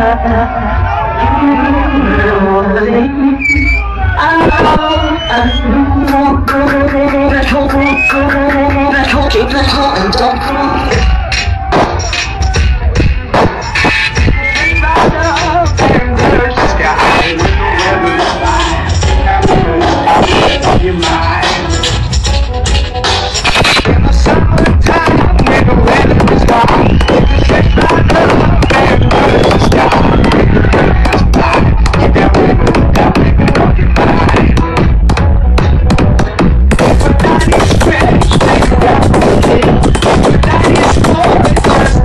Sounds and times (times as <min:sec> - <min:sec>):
Techno: 0:00.0 - 0:42.0.